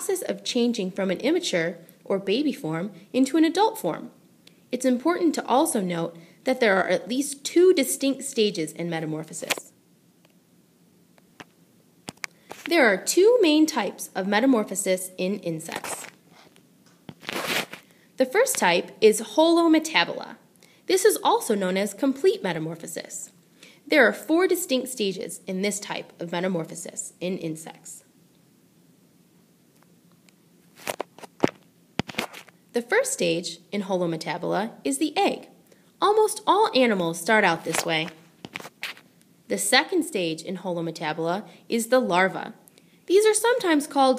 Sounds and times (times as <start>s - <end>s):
Speech: 0.0s - 4.2s, 4.8s - 9.8s, 12.7s - 16.1s, 18.2s - 28.1s, 32.8s - 38.2s, 39.5s - 44.1s.